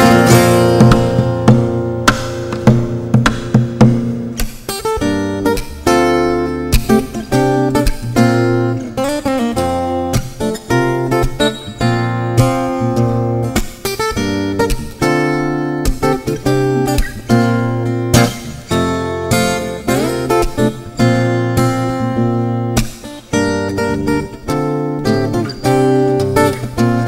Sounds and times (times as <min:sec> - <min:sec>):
Acoustic guitar: 0:00.0 - 0:27.0.